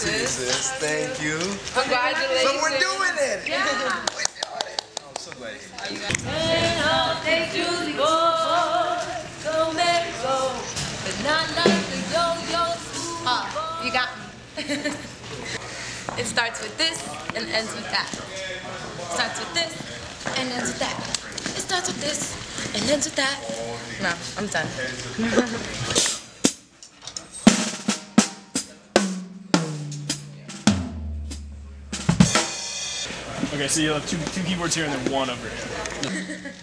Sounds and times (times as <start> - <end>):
Drum kit: 10.8 - 12.7, 25.8 - 33.7
Drum roll: 11.3 - 12.7, 27.4 - 33.5
Rimshot: 27.5 - 33.1
Bass drum: 28.2 - 32.9.